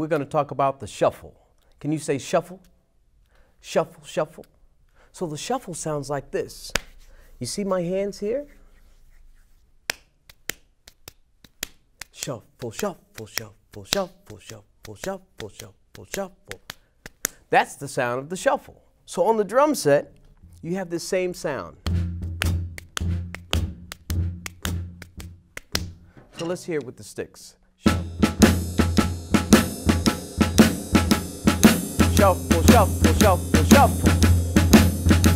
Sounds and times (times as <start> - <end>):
Speech: 0.0 - 2.7, 3.6 - 4.5, 5.1 - 6.8, 7.4 - 8.6, 12.1 - 16.6, 17.5 - 21.8, 26.4 - 28.0, 32.0 - 34.1.